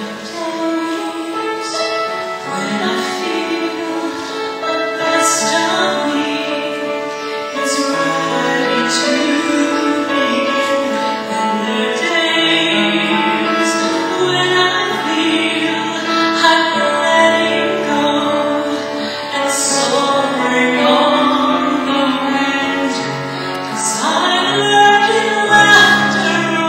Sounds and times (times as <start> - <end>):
Female singing: 0.0 - 26.6
Music: 0.0 - 26.6.